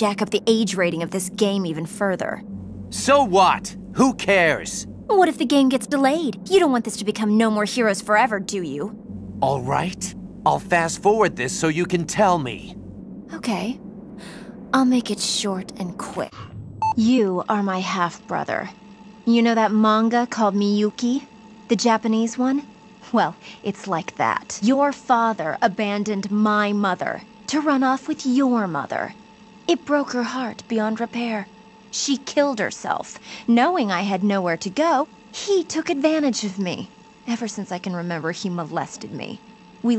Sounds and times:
Female speech, woman speaking: 0.0 - 2.4, 5.1 - 8.9, 13.3 - 16.4, 17.0 - 39.9
Speech synthesizer: 0.0 - 2.4, 3.0 - 12.7, 13.3 - 13.8, 14.8 - 39.9
Conversation: 0.0 - 39.9
Male speech, man speaking: 3.0 - 4.9, 9.4 - 12.8.

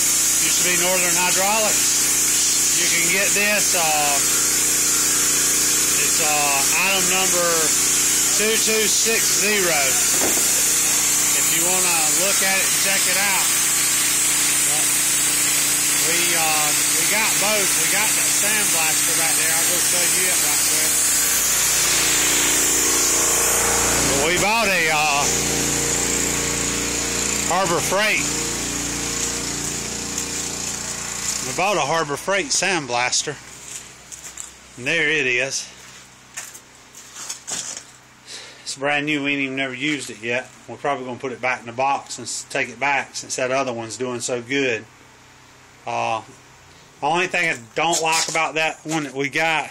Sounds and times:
Outside, urban or manmade: 0.0 - 49.7
Speech: 0.4 - 4.3, 6.0 - 10.0, 11.3 - 13.5, 14.7 - 14.9, 16.0 - 21.0, 24.1 - 25.3, 27.4 - 28.3, 31.4 - 33.4, 34.8 - 35.7, 38.7 - 44.9, 45.8 - 46.3, 47.0 - 49.7.

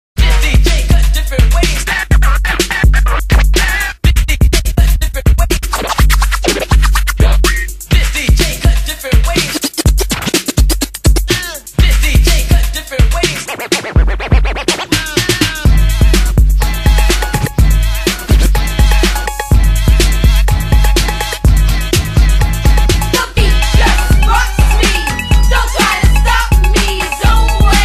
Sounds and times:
Music: 0.2 - 27.8.

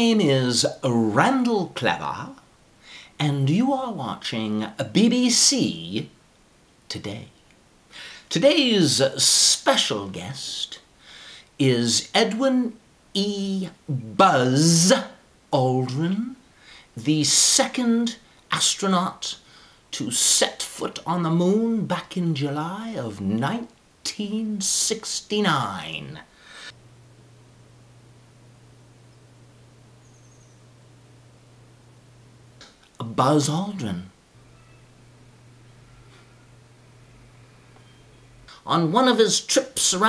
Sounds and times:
Speech: 0.0 - 2.5, 3.2 - 6.2, 6.9 - 7.4, 8.3 - 10.9, 11.6 - 16.4, 17.0 - 26.3, 33.0 - 34.2, 38.5 - 40.0.

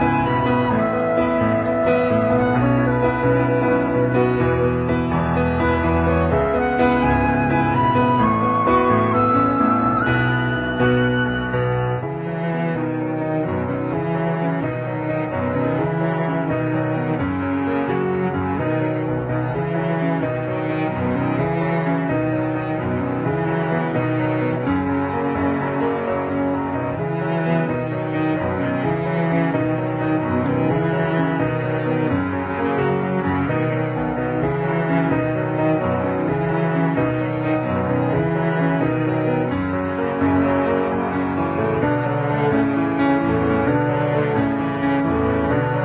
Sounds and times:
Music: 0.0 - 45.8.

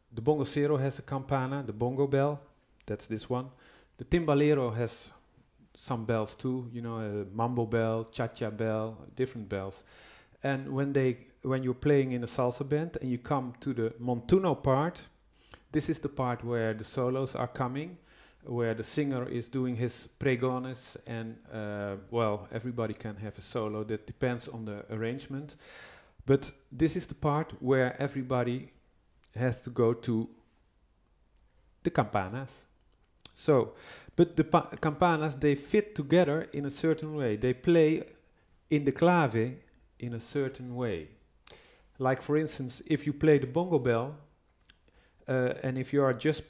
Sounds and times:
Speech: 0.1 - 25.6, 26.2 - 30.4, 31.8 - 41.2, 42.0 - 44.3, 45.2 - 46.4.

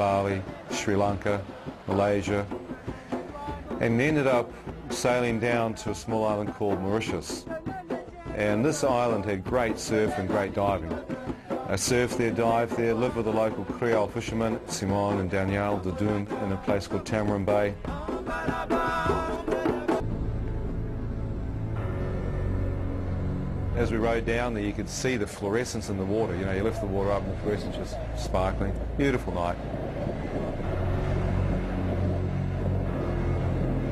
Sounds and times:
Speech: 0.0 - 2.5, 3.8 - 7.4, 8.4 - 11.0, 11.7 - 17.8, 23.8 - 29.6
Music: 0.0 - 33.9.

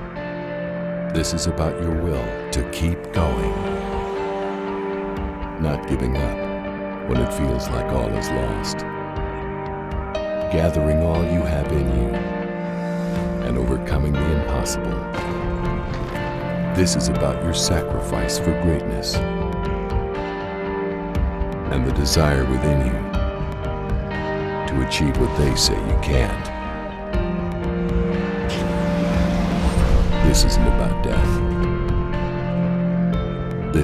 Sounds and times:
Music: 0.0 - 33.8
Speech: 1.1 - 3.7, 5.6 - 6.4, 7.1 - 8.8, 10.5 - 12.2, 13.4 - 15.1, 16.8 - 19.2, 21.7 - 23.1, 24.7 - 26.5, 30.2 - 31.4.

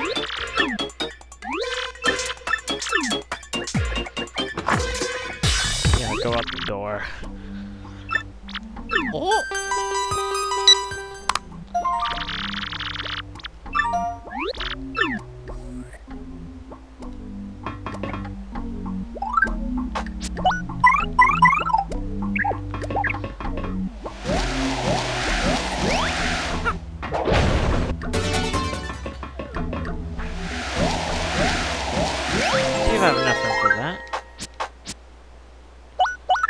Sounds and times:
Music: 0.0 - 31.6, 32.3 - 34.8.

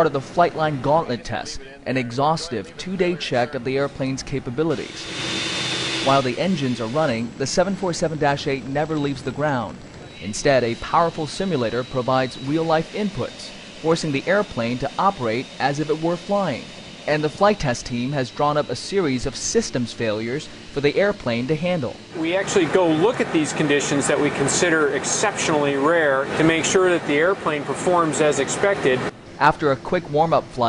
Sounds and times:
Speech: 0.0 - 5.0, 6.1 - 30.6.

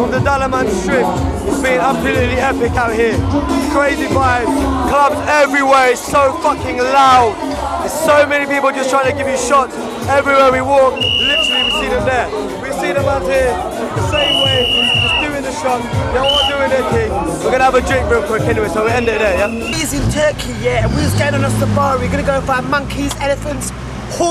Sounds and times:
Music: 0.0 - 24.3
Speech: 0.0 - 24.3.

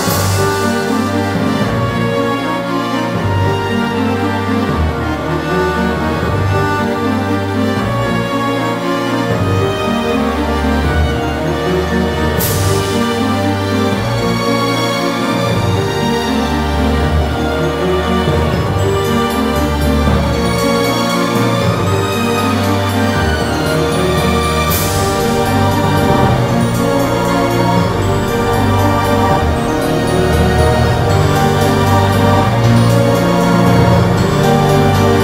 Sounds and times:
Soundtrack music: 0.0 - 35.2
Theme music: 0.0 - 35.2.

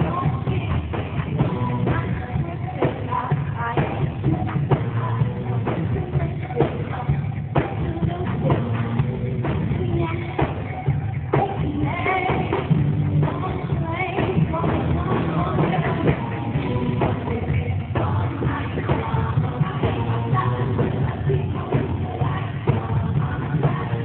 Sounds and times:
Music: 0.0 - 24.0.

